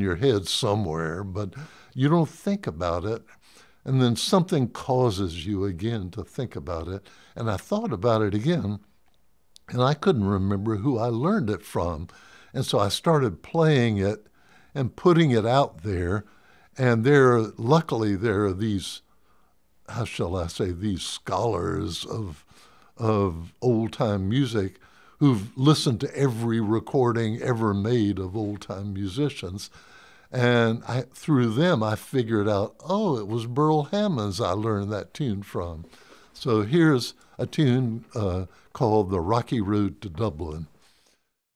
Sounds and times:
Speech: 0:00.0 - 0:08.9, 0:09.6 - 0:19.1, 0:19.9 - 0:29.7, 0:30.3 - 0:40.7.

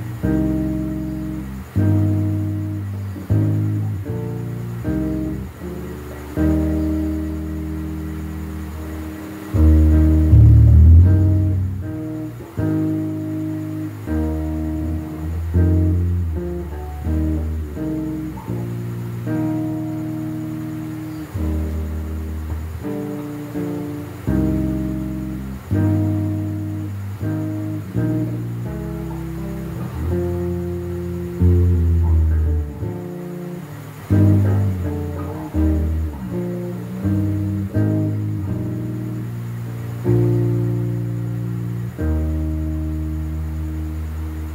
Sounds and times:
Electric guitar: 0:00.0 - 0:44.5
Strum: 0:00.0 - 0:44.5.

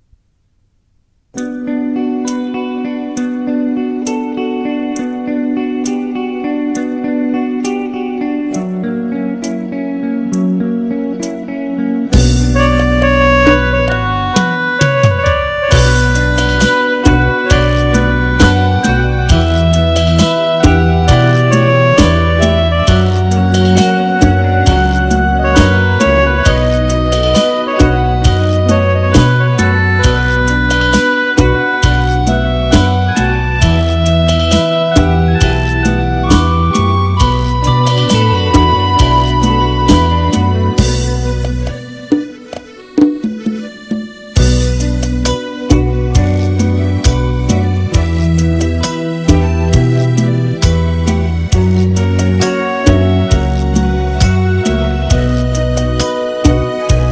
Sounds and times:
Blues: 0:01.3 - 0:57.1.

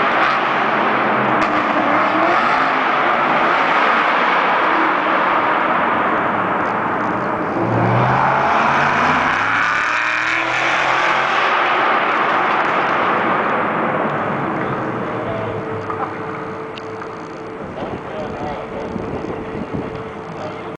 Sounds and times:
Speech: 0:17.8 - 0:20.7.

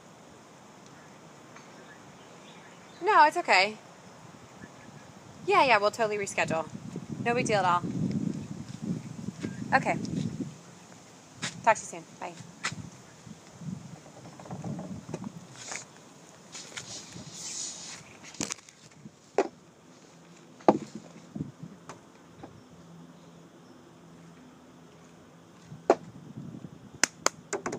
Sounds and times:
Speech: 0:03.0 - 0:03.8, 0:05.5 - 0:06.7, 0:07.3 - 0:07.8, 0:09.7 - 0:10.0, 0:11.6 - 0:12.4.

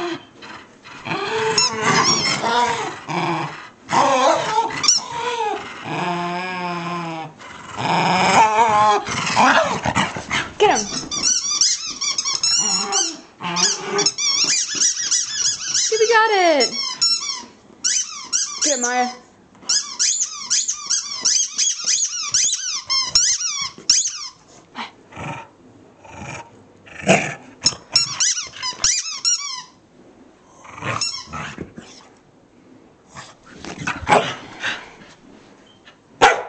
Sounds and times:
Growling: 0:00.0 - 0:10.6, 0:12.5 - 0:14.2, 0:24.8 - 0:27.6, 0:30.4 - 0:32.0
Squeak: 0:01.5 - 0:02.7, 0:04.8 - 0:05.2, 0:10.8 - 0:24.4, 0:27.6 - 0:29.8, 0:31.0 - 0:32.0.

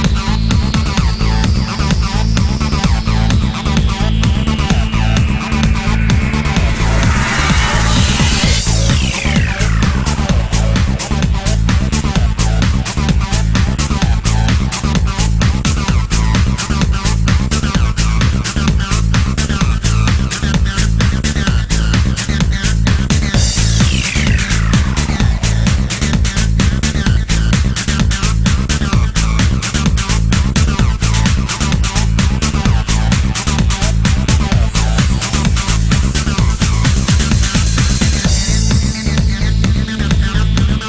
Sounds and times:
Music: 0:00.0 - 0:40.8.

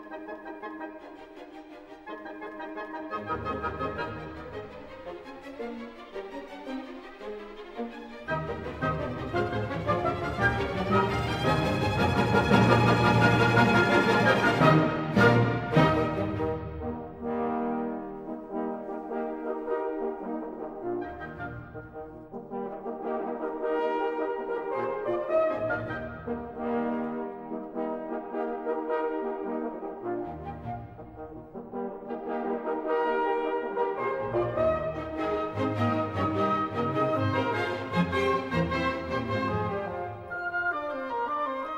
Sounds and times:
Music: 0:00.0 - 0:41.7.

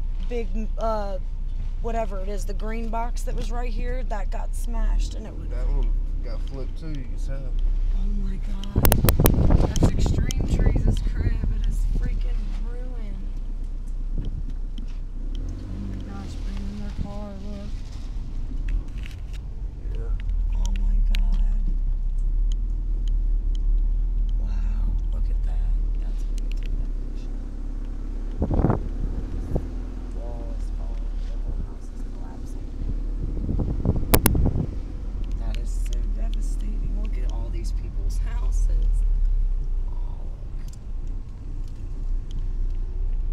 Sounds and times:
Car: 0:00.0 - 0:43.3
Wind: 0:00.0 - 0:43.3.

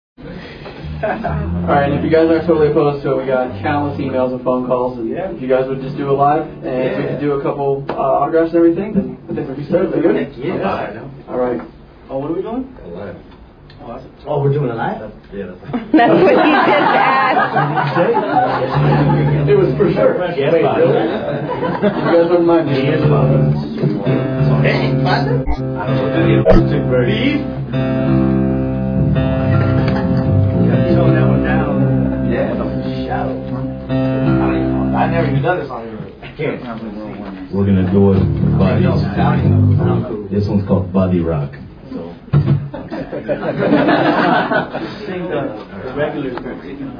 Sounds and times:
Music: 0:00.4 - 0:07.4, 0:18.6 - 0:20.2, 0:22.5 - 0:35.5, 0:37.6 - 0:40.3
Speech: 0:01.2 - 0:27.5, 0:30.7 - 0:33.7, 0:34.3 - 0:42.2, 0:44.9 - 0:46.9.

